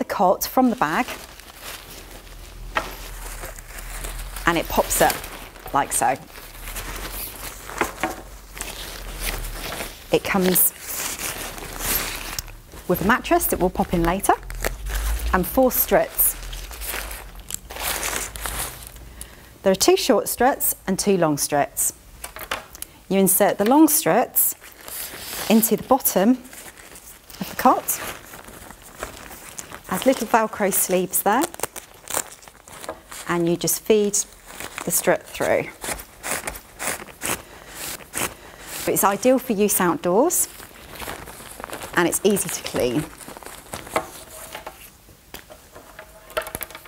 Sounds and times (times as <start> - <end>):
Speech: 0.0 - 1.1, 4.5 - 6.3, 10.1 - 10.8, 12.9 - 14.4, 15.3 - 16.4, 19.7 - 22.0, 23.1 - 24.6, 25.5 - 26.5, 27.4 - 28.1, 29.9 - 31.5, 33.3 - 34.3, 34.9 - 35.8, 38.9 - 40.5, 42.0 - 43.1.